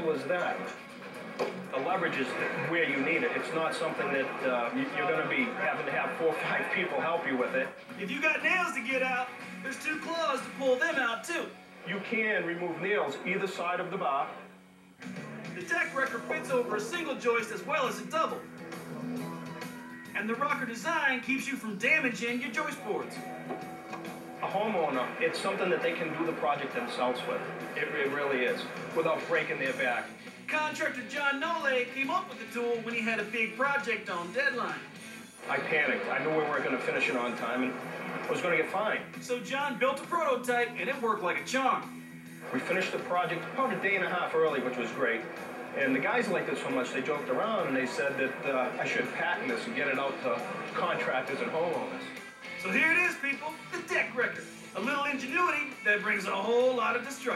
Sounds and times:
Speech: 0.0s - 0.8s, 1.7s - 14.4s, 15.6s - 18.4s, 20.2s - 23.2s, 24.4s - 34.9s, 35.5s - 41.9s, 42.5s - 45.2s, 45.8s - 57.3s
Music: 0.0s - 57.3s.

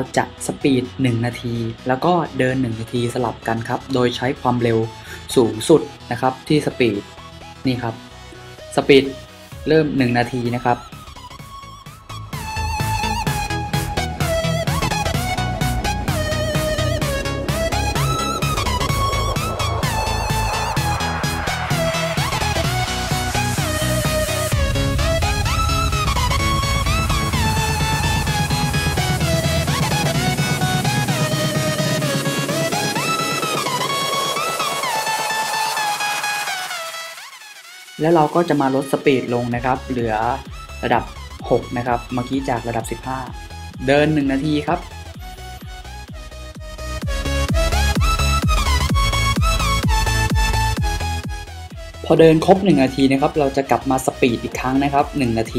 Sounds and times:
Speech: 0.0s - 7.0s, 7.6s - 8.0s, 8.8s - 10.8s, 38.0s - 44.8s, 52.1s - 55.5s
Music: 0.0s - 55.5s.

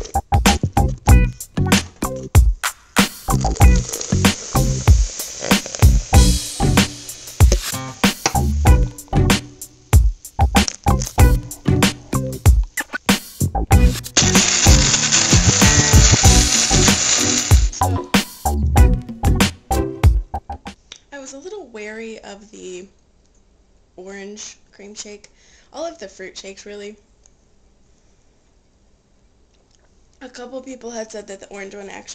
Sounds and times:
Music: 0.0s - 20.8s
Speech: 21.1s - 23.0s, 24.0s - 27.1s, 30.2s - 32.1s.

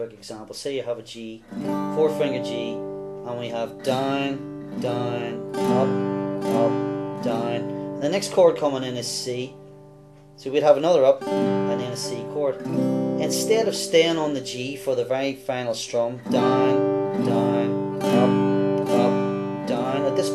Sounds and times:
Speech: 0.0s - 9.6s, 10.4s - 20.3s
Music: 1.4s - 20.3s.

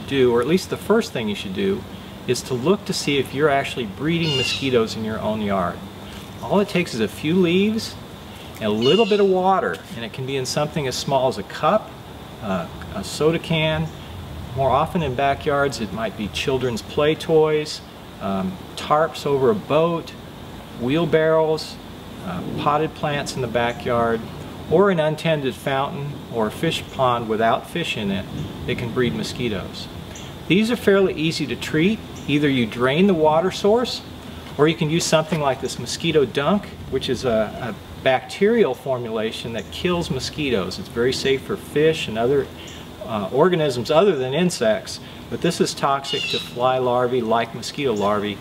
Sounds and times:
Speech: 0.0s - 5.8s, 6.4s - 8.0s, 8.6s - 13.9s, 14.6s - 20.2s, 20.8s - 29.9s, 30.5s - 48.4s.

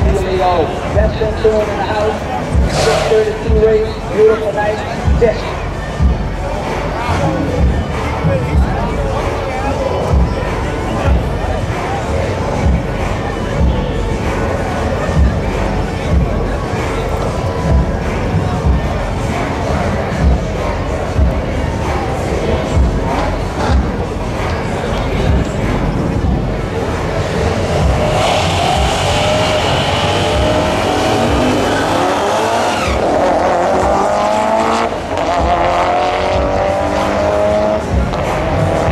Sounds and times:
Speech: 0.0s - 27.9s
Music: 0.0s - 38.9s.

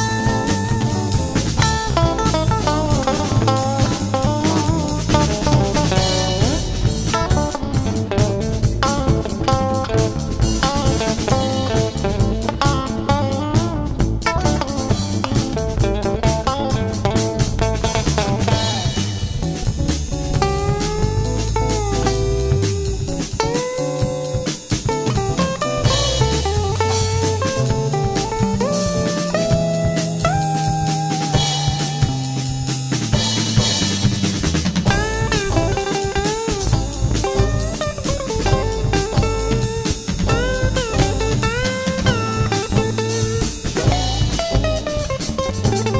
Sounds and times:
Music: 0.0s - 45.9s.

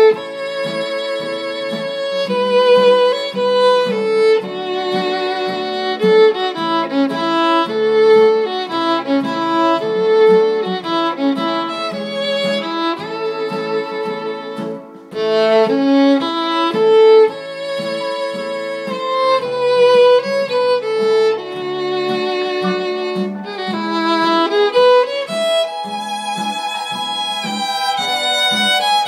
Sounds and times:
Violin, fiddle: 0.0s - 29.0s.

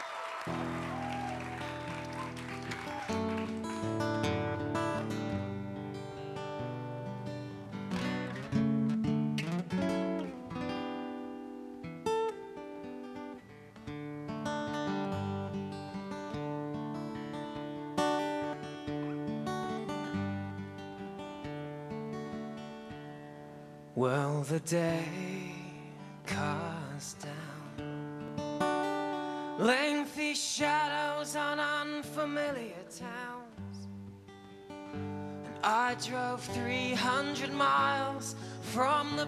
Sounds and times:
Music: 0.0s - 39.2s.

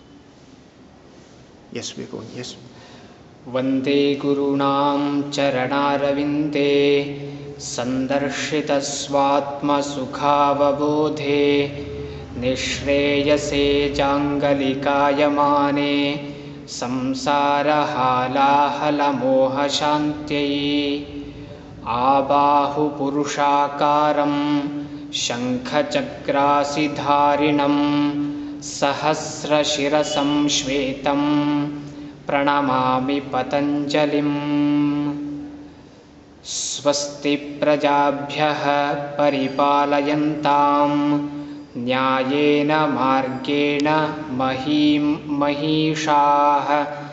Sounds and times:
Mantra: 3.4s - 35.6s, 36.4s - 47.1s.

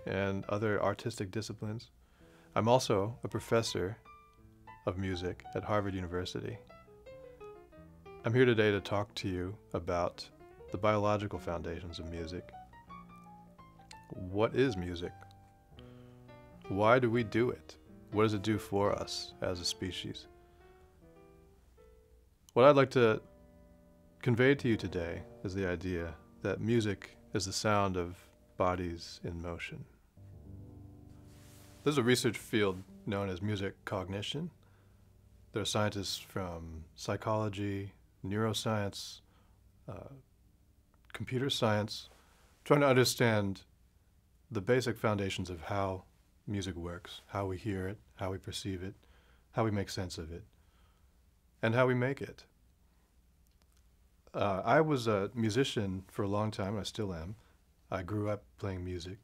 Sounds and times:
Speech: 0.0s - 1.9s, 2.6s - 4.0s, 4.8s - 6.6s, 8.2s - 12.5s, 13.9s - 15.2s, 16.7s - 20.3s, 22.5s - 23.2s, 24.2s - 30.0s, 31.8s - 34.6s, 35.5s - 39.3s, 39.9s - 40.2s, 41.1s - 43.7s, 44.5s - 49.0s, 49.6s - 50.5s, 51.6s - 52.5s, 54.3s - 59.2s
Music: 0.0s - 38.5s.

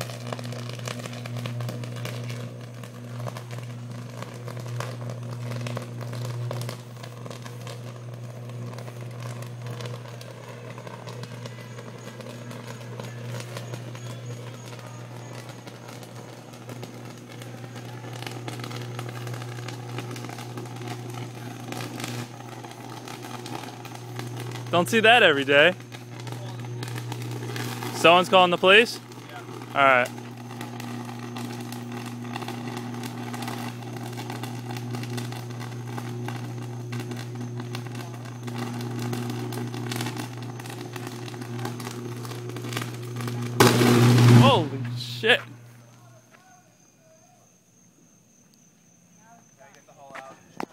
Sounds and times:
Outside, urban or manmade: 0.0s - 50.7s
Speech: 24.7s - 26.7s, 28.0s - 30.1s, 44.4s - 47.4s, 49.2s - 50.7s.

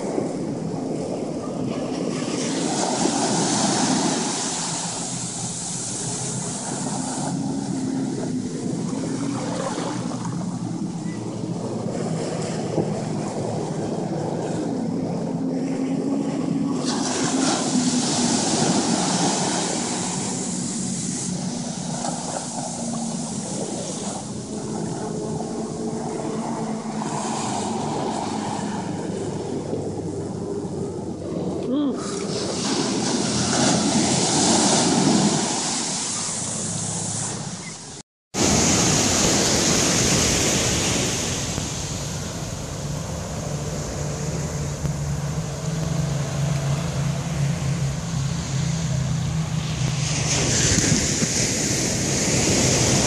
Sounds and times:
Ocean: 0.0s - 53.0s.

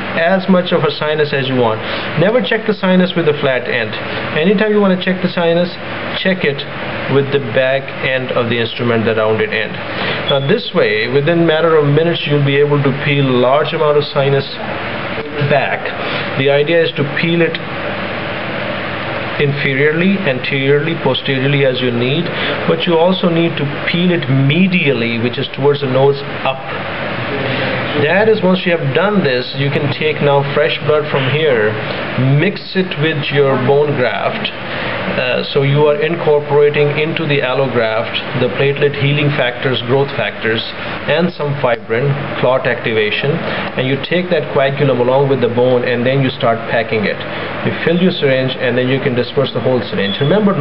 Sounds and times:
Speech: 0.1s - 17.7s, 19.4s - 50.6s.

